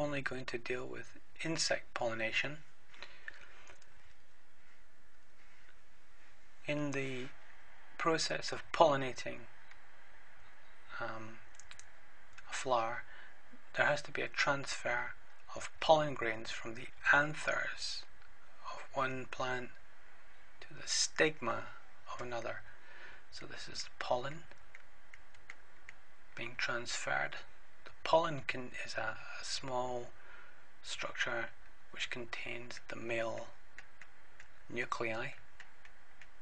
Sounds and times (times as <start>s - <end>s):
Speech: 0.0s - 2.6s, 6.6s - 7.4s, 8.0s - 9.5s, 10.9s - 11.4s, 12.4s - 13.1s, 13.7s - 19.8s, 20.6s - 22.7s, 23.3s - 24.5s, 26.4s - 30.2s, 30.8s - 33.6s, 34.7s - 35.4s.